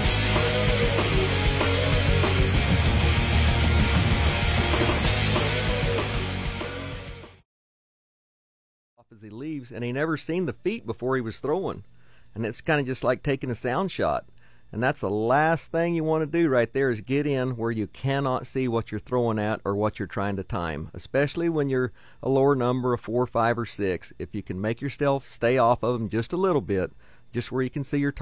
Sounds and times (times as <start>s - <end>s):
Speech: 9.0s - 28.2s.